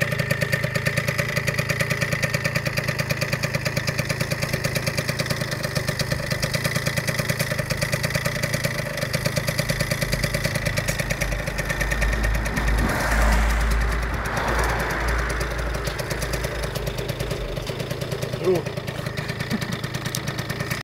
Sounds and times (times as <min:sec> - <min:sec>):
Speech: 0:18.4 - 0:18.7.